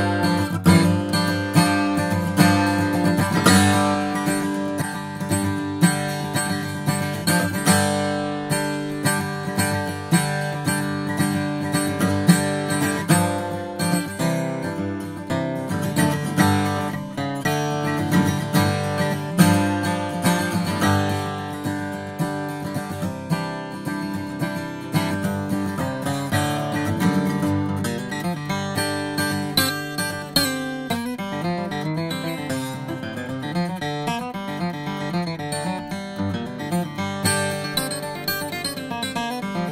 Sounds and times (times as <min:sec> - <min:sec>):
Music: 0:00.0 - 0:39.7.